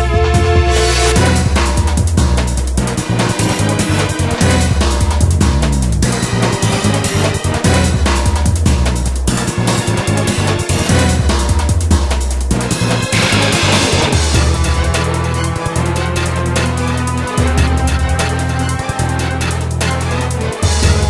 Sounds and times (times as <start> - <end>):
Music: 0.0 - 21.0.